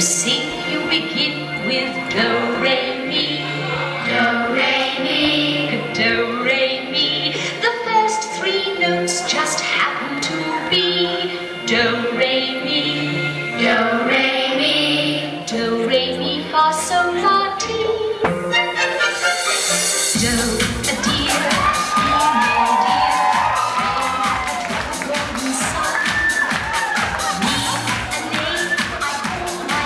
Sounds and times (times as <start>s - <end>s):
Exciting music: 18.3s - 29.8s.